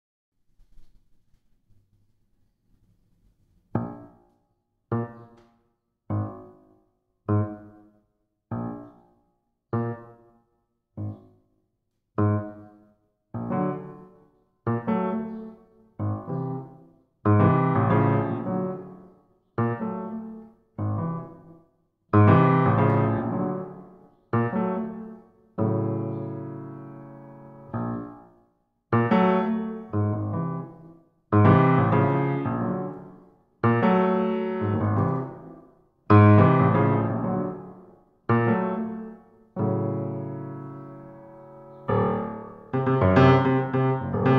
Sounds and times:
Electric piano: 4.9s - 5.4s, 7.3s - 7.8s, 9.7s - 10.3s, 13.4s - 21.5s, 22.1s - 28.3s, 28.9s - 44.3s.

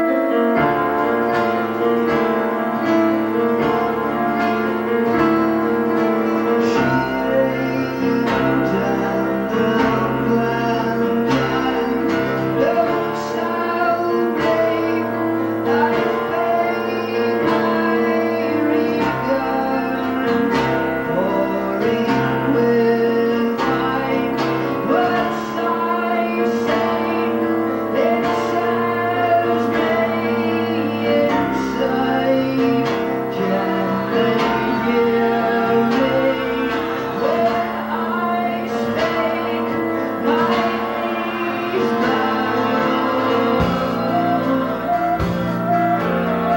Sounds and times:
Music: 0.0s - 46.5s.

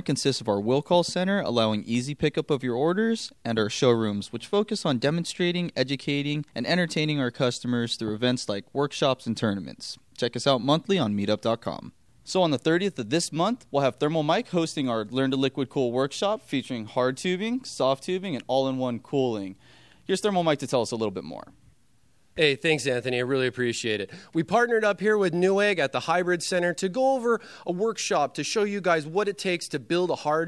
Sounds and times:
Speech: 0.0s - 21.6s, 22.4s - 30.4s.

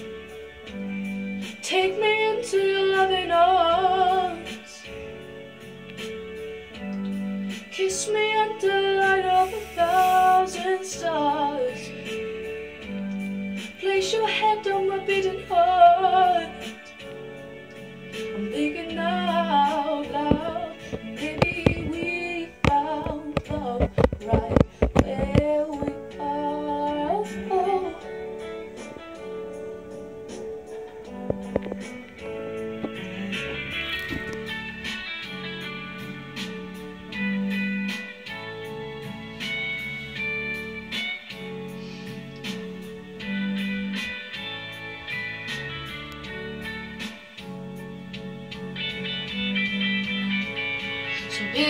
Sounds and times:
Inside, small room: 0.0s - 51.7s
Music: 0.0s - 51.7s.

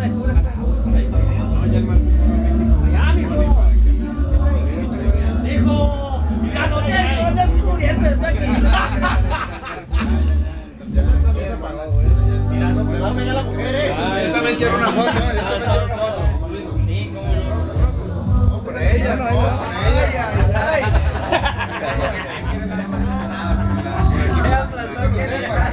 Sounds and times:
Music: 0.0s - 25.7s
Speech: 0.0s - 25.7s.

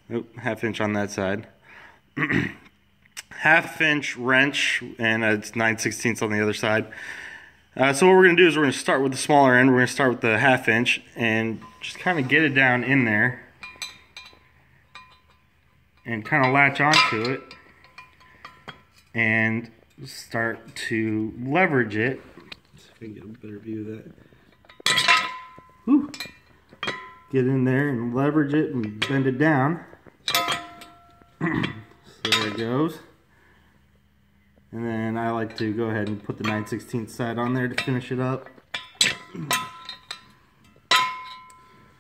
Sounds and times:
Speech: 0.1s - 1.6s, 3.2s - 6.9s, 7.8s - 13.5s, 16.1s - 17.5s, 19.2s - 24.2s, 27.3s - 29.9s, 31.4s - 33.1s, 34.7s - 38.5s.

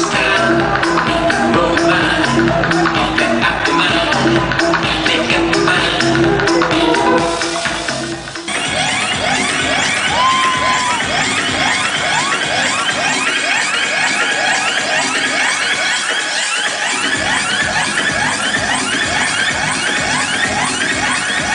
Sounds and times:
Music: 0.0s - 21.5s.

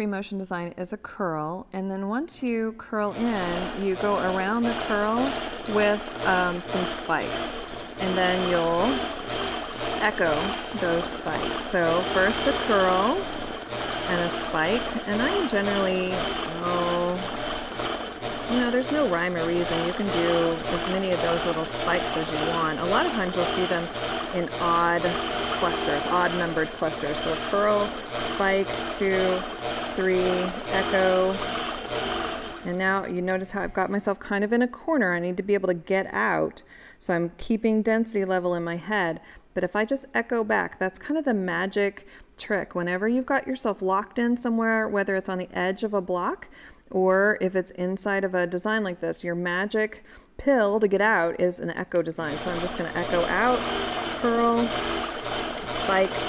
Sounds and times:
Speech: 0.0s - 9.0s, 9.9s - 13.3s, 14.1s - 17.3s, 18.5s - 31.4s, 32.7s - 54.8s, 55.7s - 56.2s.

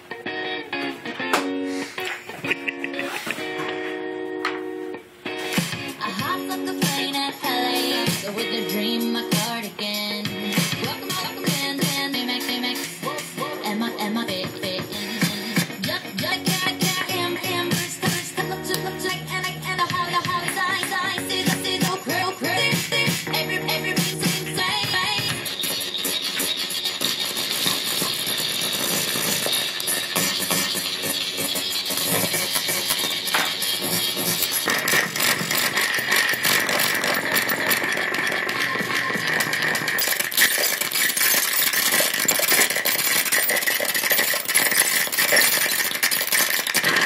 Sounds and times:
Scratching (performance technique): 1.2s - 4.0s, 5.3s - 47.0s.

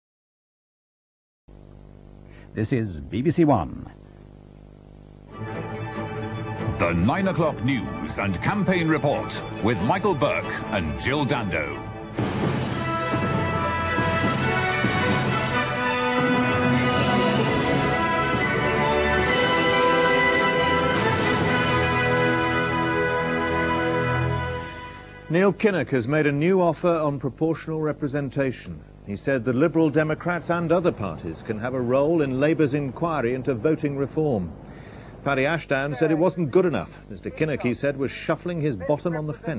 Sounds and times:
Speech: 2.6s - 4.0s, 6.8s - 11.8s, 25.3s - 34.5s, 35.3s - 39.5s.

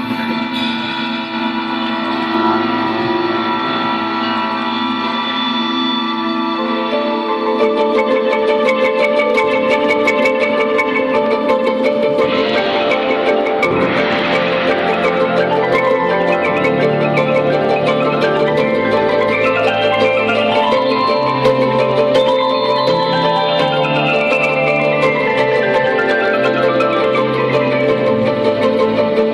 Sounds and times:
Percussion: 0.0s - 29.3s.

